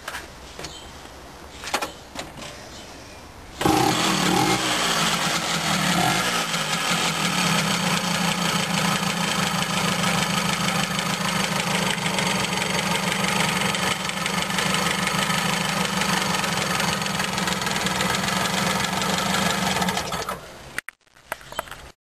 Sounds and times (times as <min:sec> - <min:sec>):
Vehicle: 0:00.0 - 0:20.8
Idling: 0:03.6 - 0:20.4
Medium engine (mid frequency): 0:03.6 - 0:20.8.